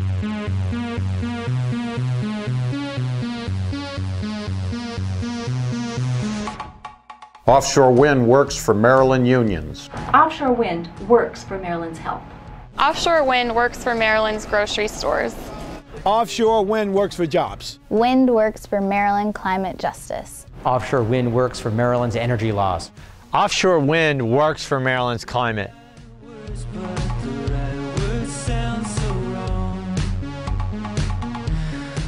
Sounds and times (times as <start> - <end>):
Music: 0.0 - 32.0
Speech: 7.5 - 12.2, 16.0 - 25.7.